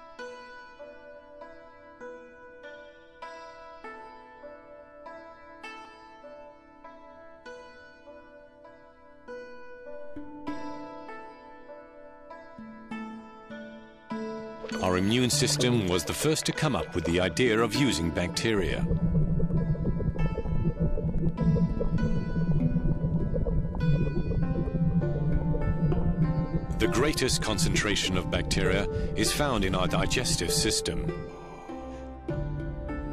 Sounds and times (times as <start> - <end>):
Keyboard (musical): 0.0 - 33.1.